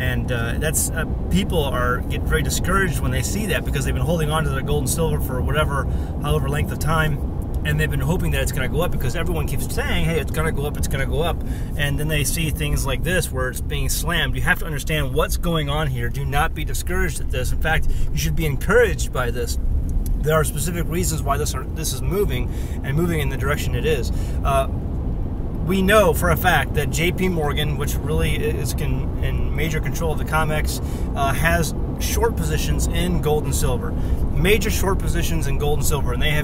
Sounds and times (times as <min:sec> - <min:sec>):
Speech: 0:00.0 - 0:19.6, 0:20.2 - 0:24.7, 0:25.6 - 0:36.4.